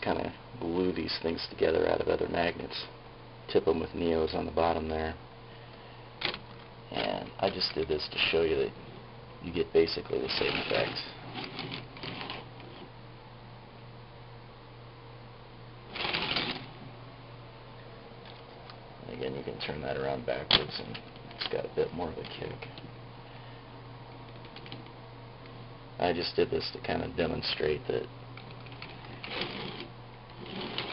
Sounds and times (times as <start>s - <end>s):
Speech: 0.0s - 5.2s, 6.9s - 8.8s, 9.4s - 11.2s, 19.0s - 22.8s, 26.0s - 28.1s.